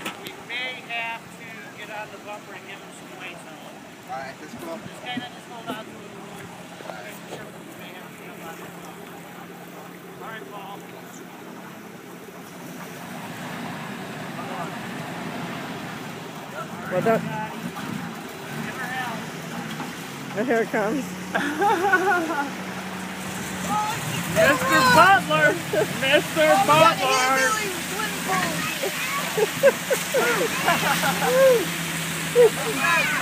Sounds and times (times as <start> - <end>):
Truck: 0.0 - 33.2.